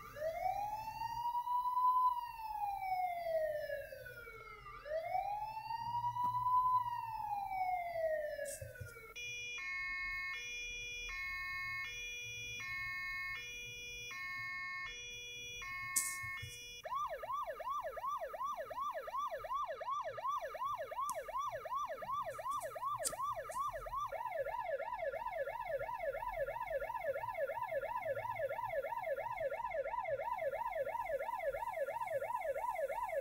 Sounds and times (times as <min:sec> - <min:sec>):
Ambulance (siren): 0:00.0 - 0:33.2
Police car (siren): 0:00.0 - 0:33.2.